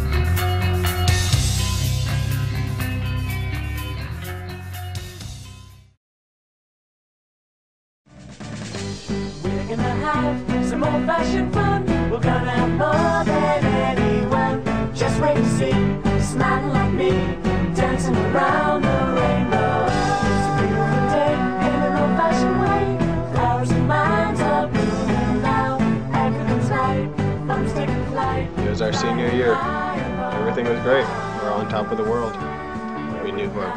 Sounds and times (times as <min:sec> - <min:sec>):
Jingle (music): 0:00.0 - 0:06.0, 0:08.1 - 0:33.7.